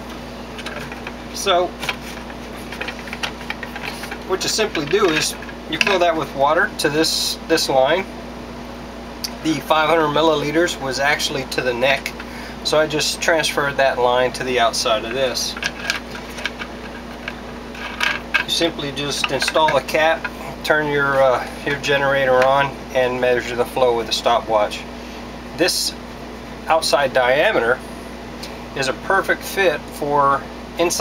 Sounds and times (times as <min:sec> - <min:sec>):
Speech: 0:01.4 - 0:01.8, 0:04.3 - 0:08.1, 0:09.3 - 0:15.6, 0:18.5 - 0:24.9, 0:25.6 - 0:26.0, 0:26.7 - 0:27.8, 0:28.8 - 0:31.0.